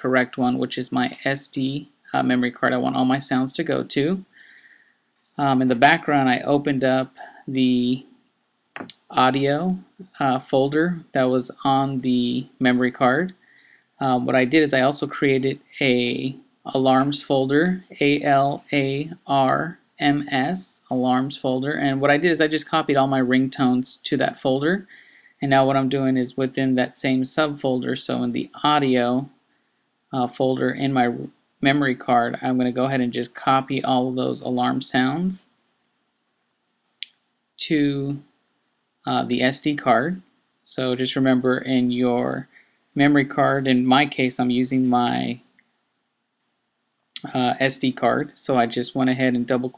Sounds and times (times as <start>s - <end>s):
Speech: 0.0s - 4.3s, 5.4s - 8.1s, 8.8s - 13.4s, 14.0s - 29.3s, 30.1s - 35.5s, 37.6s - 38.2s, 39.1s - 45.5s, 47.2s - 49.7s.